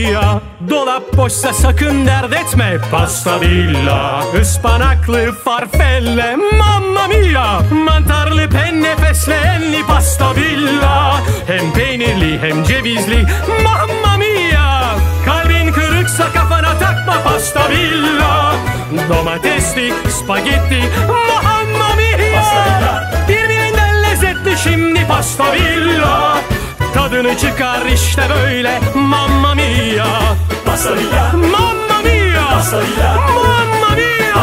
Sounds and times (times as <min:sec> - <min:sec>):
Music: 0:00.0 - 0:34.4.